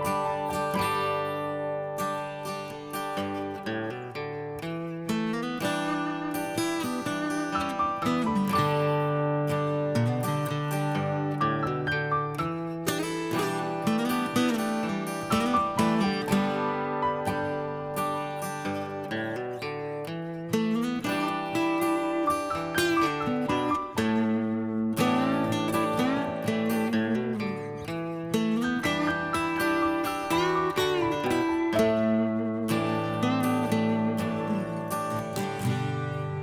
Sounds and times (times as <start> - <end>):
Music: 0.0 - 36.4.